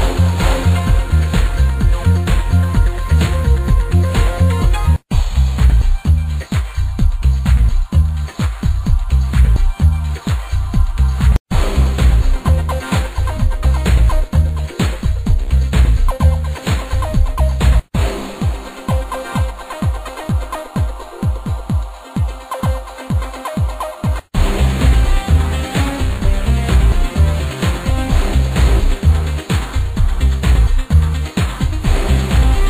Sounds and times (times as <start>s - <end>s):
Music: 0.0s - 32.6s.